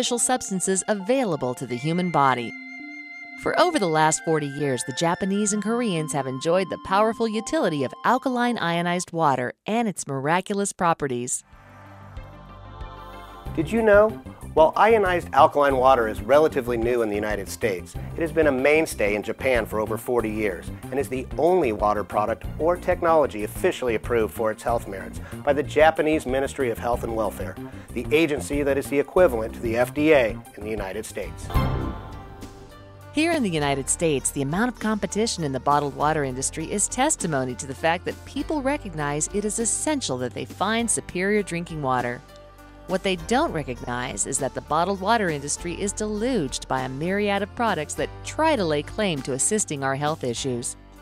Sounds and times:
Speech: 0.0s - 2.5s, 3.4s - 11.4s, 13.6s - 31.5s, 33.2s - 42.2s, 42.9s - 50.8s
Music: 0.0s - 8.9s, 11.4s - 51.0s.

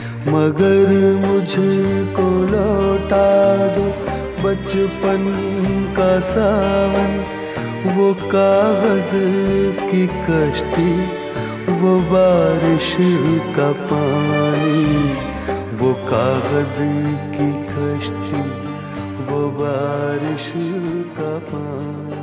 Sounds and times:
Music of Bollywood: 0.0s - 22.2s.

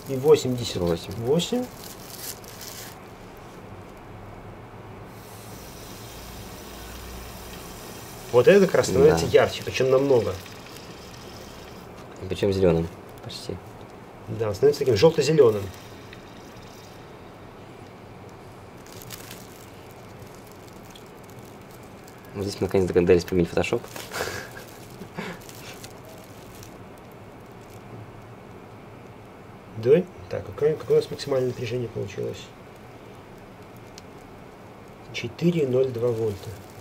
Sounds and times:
Speech: 0.1s - 1.7s, 8.3s - 10.4s, 12.2s - 13.6s, 14.3s - 15.8s, 22.4s - 23.9s, 29.8s - 32.6s, 35.1s - 36.6s
Fill (with liquid): 8.3s - 11.9s.

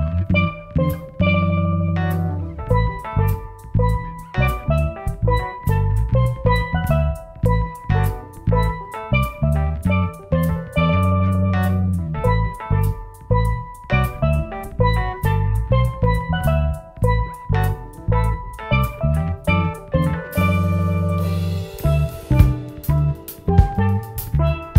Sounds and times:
Bass guitar: 0.0s - 24.7s
Drum: 0.0s - 24.7s
Drum kit: 0.0s - 24.7s
Funk: 0.0s - 24.7s
Jazz: 0.0s - 24.7s.

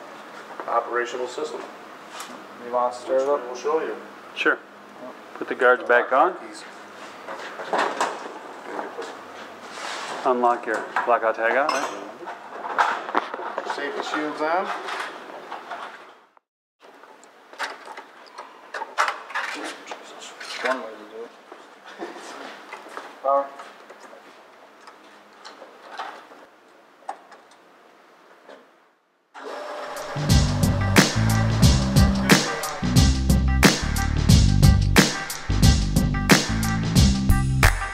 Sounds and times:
Music: 29.8s - 37.9s
Inside, large room or hall: 29.9s - 34.1s.

